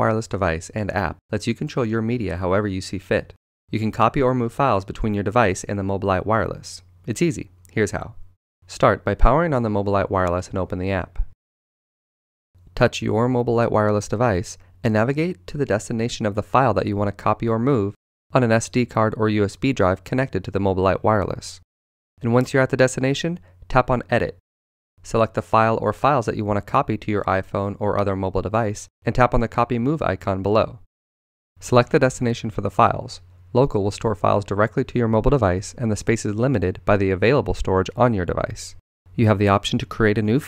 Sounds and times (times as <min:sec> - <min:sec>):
Speech: 0:00.0 - 0:11.4, 0:12.8 - 0:21.6, 0:22.2 - 0:24.4, 0:25.0 - 0:30.9, 0:31.6 - 0:40.4.